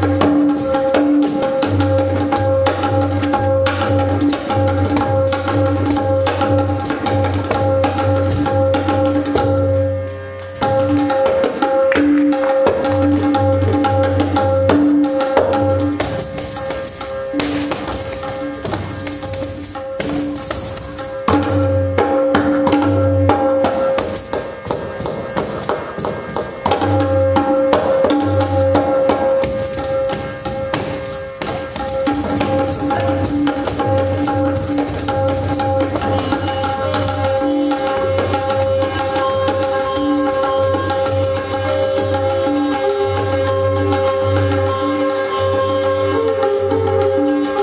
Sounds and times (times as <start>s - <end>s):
Music: 0.0s - 47.6s.